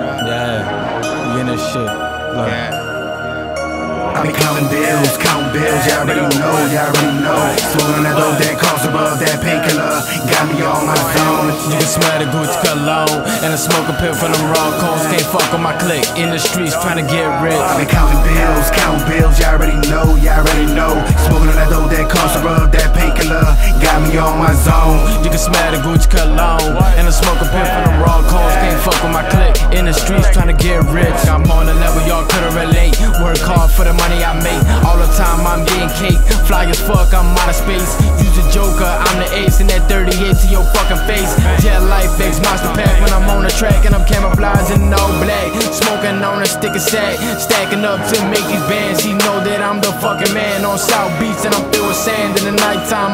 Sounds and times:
Pop music: 0.0s - 53.1s
Soundtrack music: 0.0s - 53.1s.

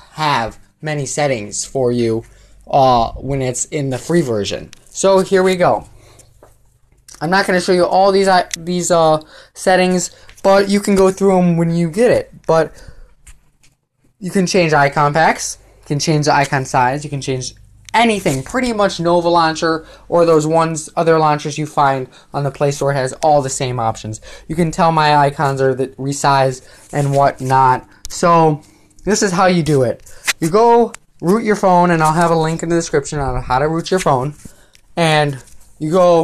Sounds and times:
Speech: 0.0s - 5.9s, 7.1s - 12.9s, 14.2s - 34.4s, 35.0s - 36.2s.

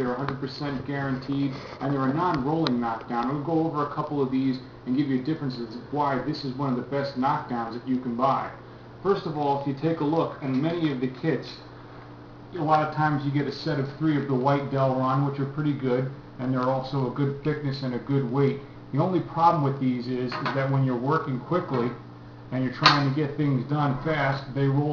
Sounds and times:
Speech: 0.0s - 11.7s, 12.5s - 24.9s.

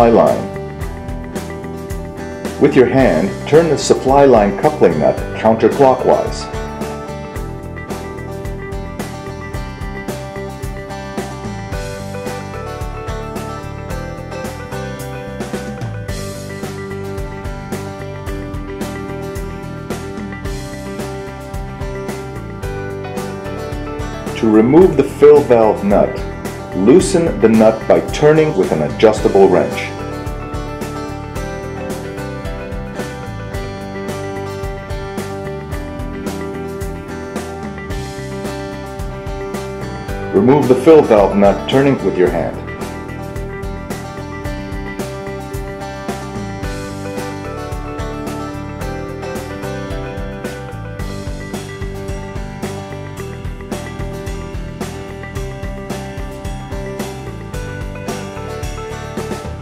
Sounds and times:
Speech: 0.0s - 0.5s, 2.6s - 6.5s, 24.4s - 26.2s, 26.8s - 30.0s, 40.3s - 42.6s
Music: 0.0s - 59.6s.

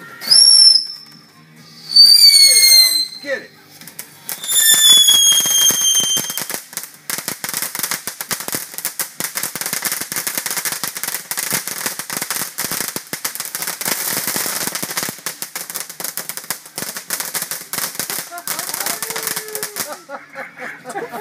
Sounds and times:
Fireworks: 0.0s - 20.3s.

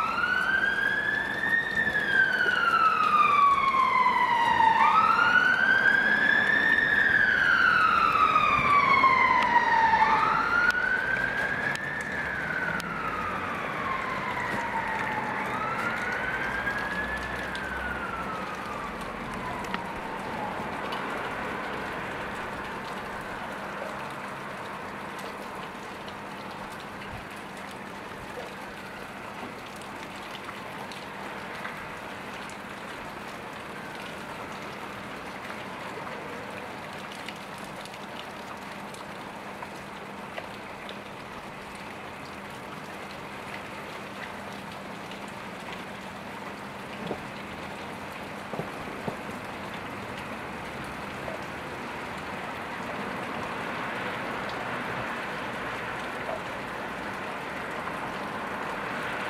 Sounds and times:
Rain on surface: 0.0s - 59.2s
Raindrop: 0.0s - 59.2s.

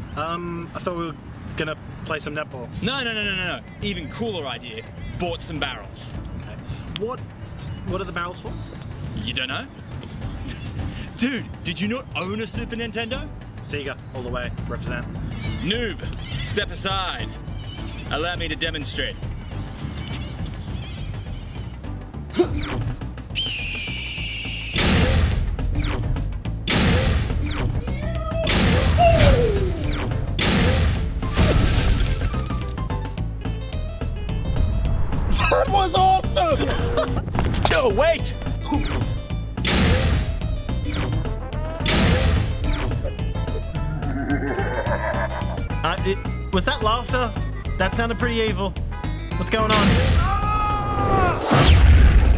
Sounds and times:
Music: 0.0s - 52.3s.

